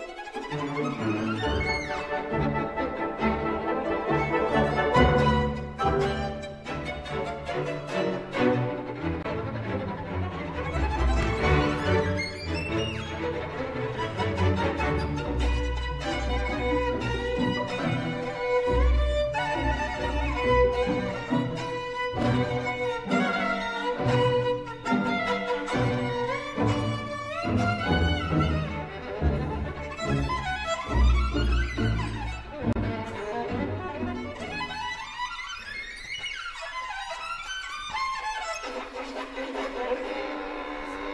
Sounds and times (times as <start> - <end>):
Bowed string instrument: 0.0 - 41.1.